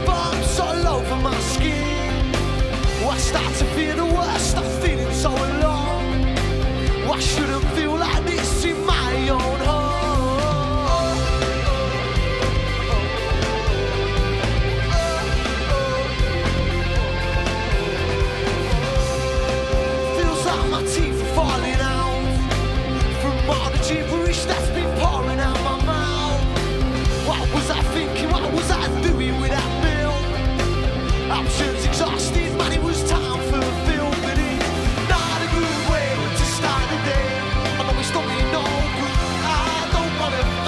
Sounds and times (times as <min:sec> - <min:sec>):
Music: 0:00.0 - 0:40.6.